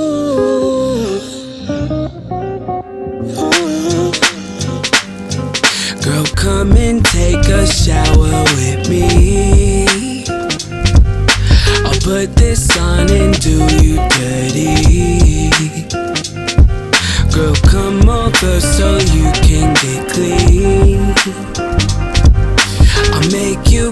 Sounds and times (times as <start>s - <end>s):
Music: 0.0s - 23.9s.